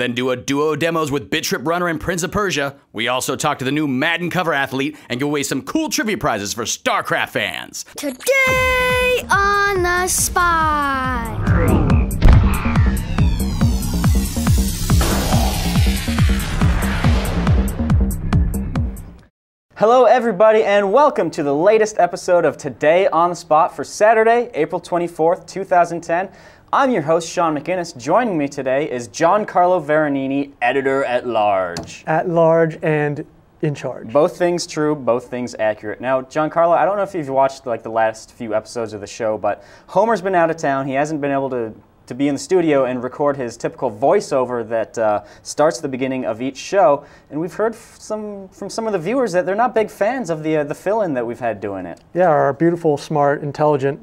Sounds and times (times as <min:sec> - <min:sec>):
Speech: 0:00.0 - 0:11.3, 0:19.8 - 0:54.0
Trance music: 0:10.1 - 0:19.0.